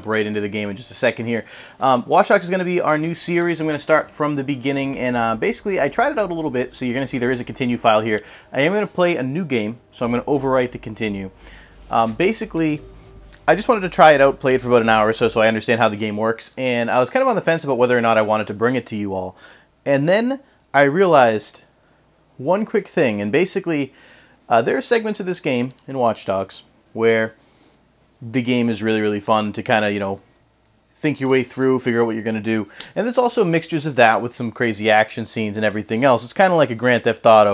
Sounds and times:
Speech: 0.0 - 21.7, 22.4 - 27.4, 28.2 - 30.3, 31.0 - 37.5.

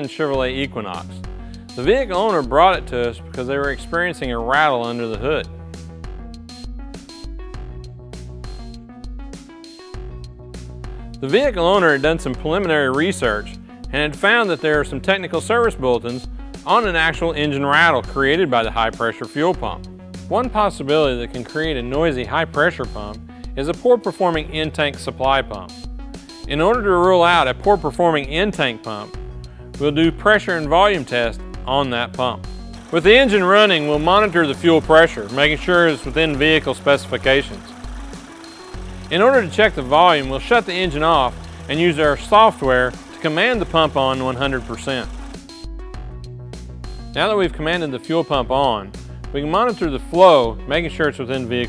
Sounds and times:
Speech: 0.0 - 1.2, 1.8 - 5.5, 11.2 - 25.7, 26.5 - 29.1, 29.8 - 32.4, 33.0 - 37.7, 39.1 - 45.1, 47.2 - 51.6
Music: 0.0 - 51.6.

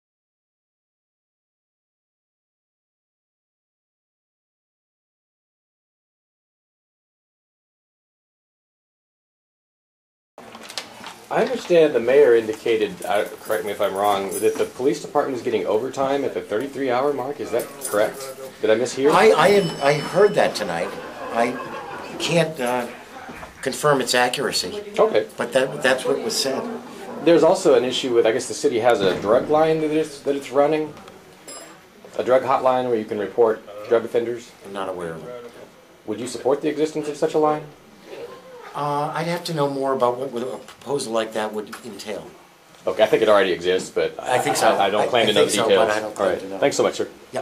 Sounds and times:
Speech: 11.3 - 31.1, 32.1 - 47.4.

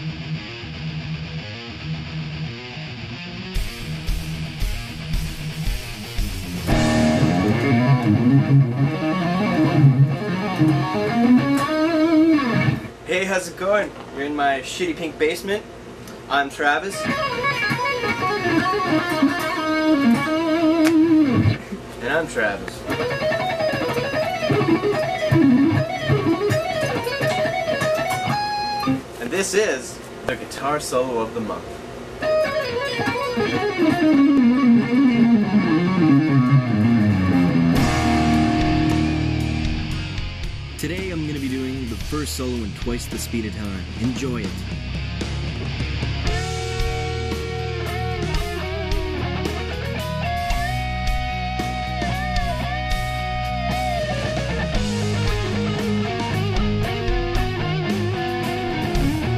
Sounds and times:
Guitar: 0.0 - 59.3
Speech: 13.1 - 15.7, 16.3 - 17.1, 22.0 - 22.9, 29.2 - 31.7, 40.8 - 44.6.

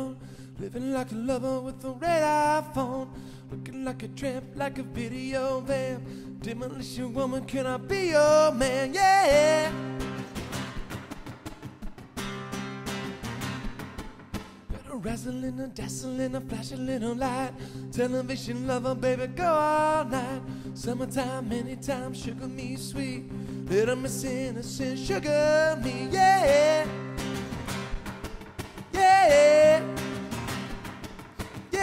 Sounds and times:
Music: 0.0 - 31.8.

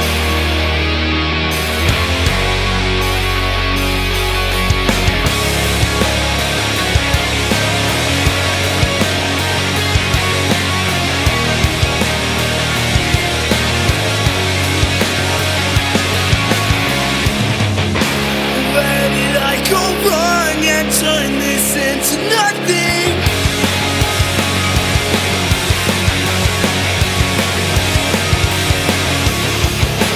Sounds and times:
Funk: 1.4 - 30.1.

